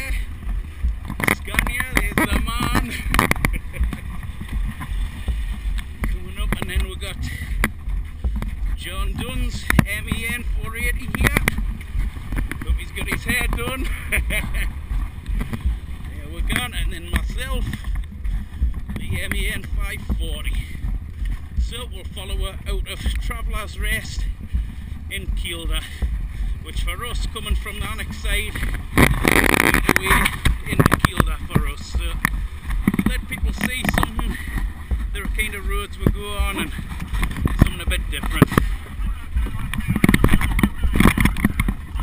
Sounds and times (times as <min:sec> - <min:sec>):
Speech: 0:01.3 - 0:03.0, 0:06.1 - 0:07.5, 0:08.8 - 0:11.6, 0:12.6 - 0:13.9, 0:16.2 - 0:17.8, 0:19.0 - 0:20.7, 0:21.6 - 0:24.3, 0:25.1 - 0:26.0, 0:26.6 - 0:28.6, 0:29.7 - 0:32.2, 0:33.0 - 0:34.5, 0:35.1 - 0:36.8, 0:37.6 - 0:42.0.